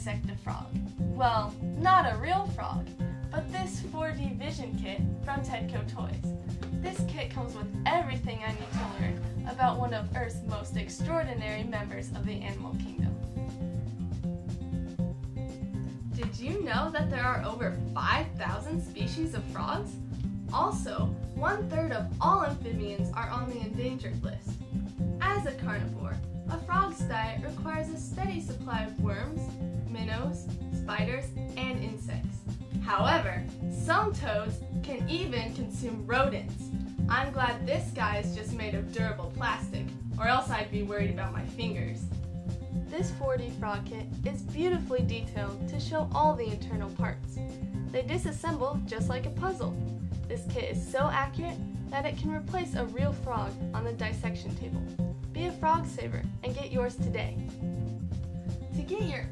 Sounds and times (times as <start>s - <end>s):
Speech: 0.0s - 13.2s, 16.2s - 24.5s, 25.2s - 42.0s, 42.9s - 57.4s, 58.8s - 59.3s
Music: 0.0s - 59.3s.